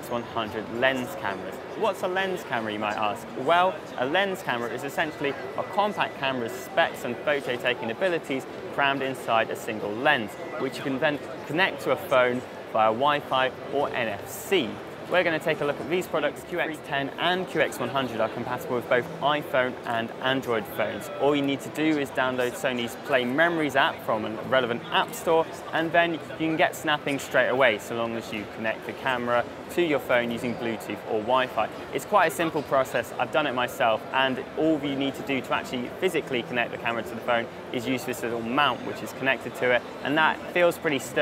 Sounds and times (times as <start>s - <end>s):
Speech: 0.0s - 41.2s.